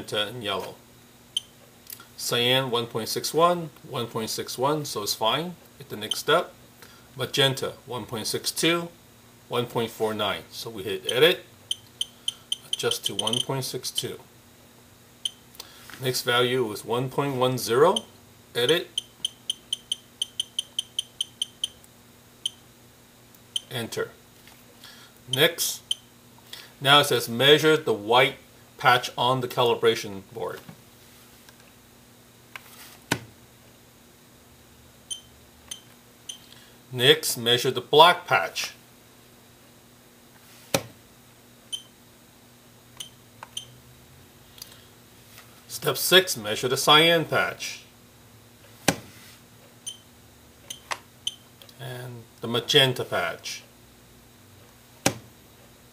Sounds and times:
Speech: 0:00.0 - 0:00.8, 0:02.2 - 0:06.6, 0:07.2 - 0:11.5, 0:12.8 - 0:14.3, 0:16.0 - 0:18.9, 0:23.7 - 0:24.2, 0:25.3 - 0:25.9, 0:26.8 - 0:30.7, 0:36.9 - 0:38.8, 0:45.7 - 0:47.9, 0:51.7 - 0:53.7
Inside, small room: 0:00.0 - 0:55.9.

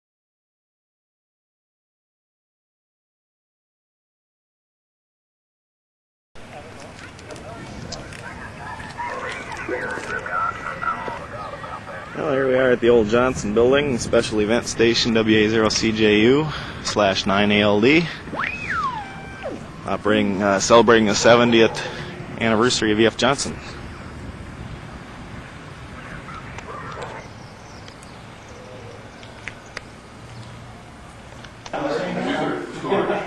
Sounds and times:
Speech: 0:06.4 - 0:18.2, 0:19.9 - 0:23.8, 0:31.7 - 0:33.2
Radio: 0:06.4 - 0:23.9, 0:25.4 - 0:27.3.

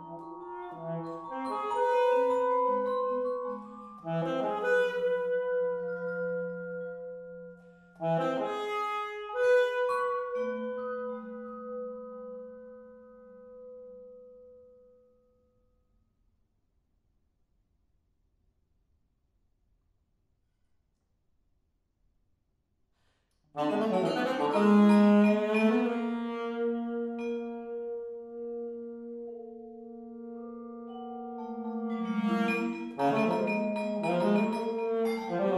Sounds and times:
Vibraphone: 0:00.0 - 0:08.6, 0:30.0 - 0:35.5
Marimba, xylophone: 0:00.0 - 0:08.7, 0:23.6 - 0:28.2, 0:30.4 - 0:35.5
Classical music: 0:00.0 - 0:13.2, 0:23.6 - 0:35.5
Brass instrument: 0:00.0 - 0:13.9, 0:23.5 - 0:35.5
Saxophone: 0:00.0 - 0:14.1, 0:23.6 - 0:35.5.

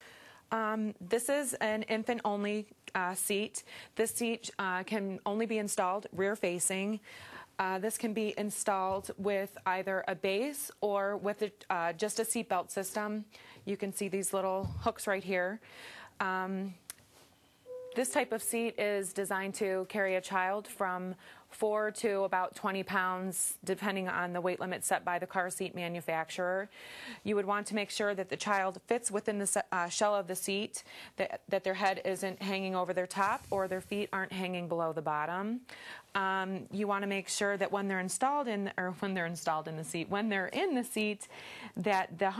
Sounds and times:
Speech: 0:00.5 - 0:07.0, 0:07.6 - 0:15.6, 0:16.2 - 0:16.8, 0:18.0 - 0:35.6, 0:36.2 - 0:42.3.

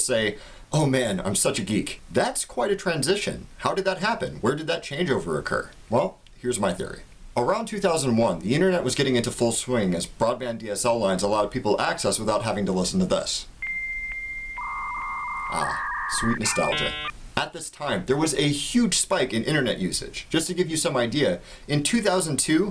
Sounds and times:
Speech: 0:00.0 - 0:13.5, 0:15.6 - 0:22.7.

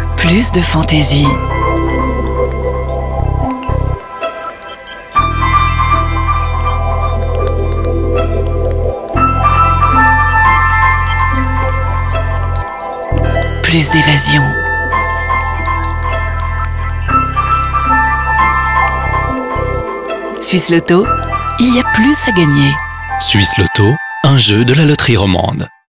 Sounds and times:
Music: 0:00.0 - 0:25.9
Speech: 0:00.2 - 0:01.4, 0:13.6 - 0:14.6, 0:20.4 - 0:25.8.

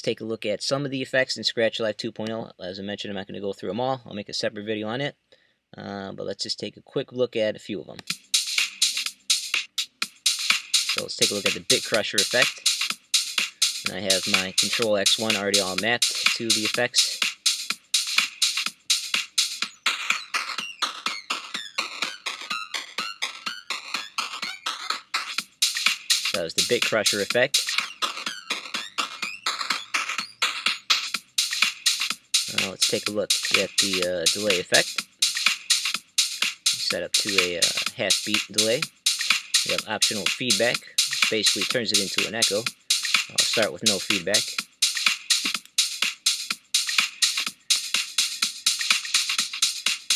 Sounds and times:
Speech: 0:00.0 - 0:05.2, 0:05.8 - 0:08.0, 0:11.0 - 0:12.6, 0:13.9 - 0:17.2, 0:26.3 - 0:27.6, 0:32.5 - 0:35.0, 0:36.8 - 0:38.8, 0:39.7 - 0:42.7, 0:43.3 - 0:44.6
Music: 0:08.0 - 0:50.1.

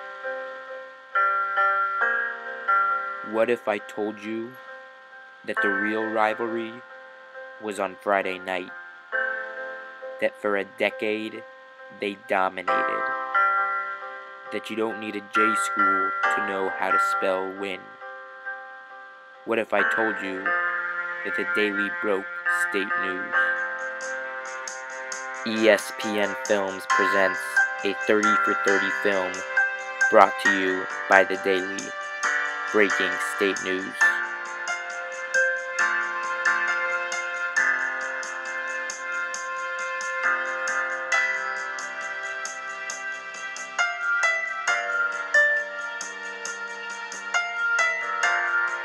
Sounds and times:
Music: 0:00.0 - 0:48.8
Speech: 0:03.3 - 0:04.6, 0:05.5 - 0:06.8, 0:07.6 - 0:08.7, 0:10.2 - 0:11.4, 0:12.0 - 0:13.1, 0:14.6 - 0:17.9, 0:19.5 - 0:20.5, 0:21.3 - 0:23.4, 0:25.5 - 0:29.4, 0:30.1 - 0:31.9, 0:32.8 - 0:34.1.

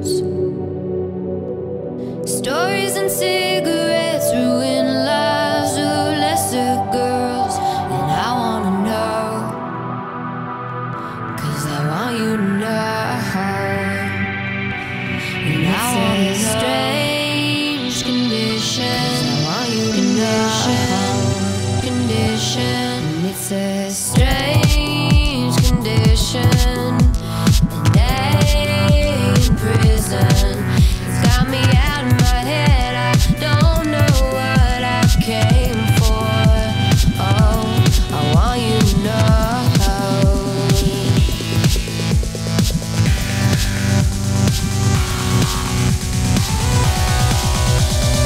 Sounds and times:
Dubstep: 0:02.4 - 0:48.2.

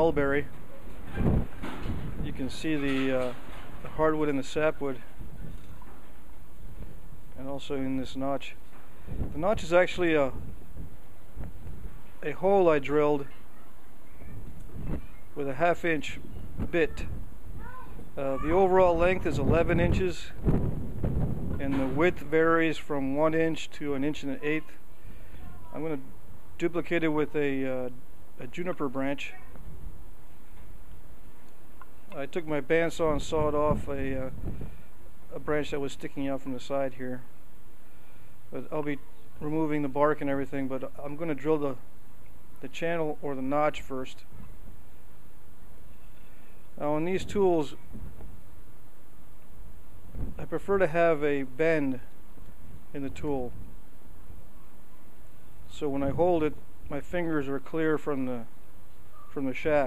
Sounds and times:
Speech: 0:00.0 - 0:00.6, 0:02.2 - 0:05.1, 0:07.4 - 0:08.6, 0:09.4 - 0:10.4, 0:12.2 - 0:13.4, 0:15.4 - 0:20.4, 0:21.6 - 0:24.8, 0:25.4 - 0:29.6, 0:32.2 - 0:34.4, 0:35.3 - 0:37.3, 0:38.6 - 0:41.8, 0:42.6 - 0:44.3, 0:46.8 - 0:47.8, 0:50.4 - 0:52.1, 0:53.0 - 0:53.6, 0:55.7 - 0:58.5, 0:59.3 - 0:59.8.

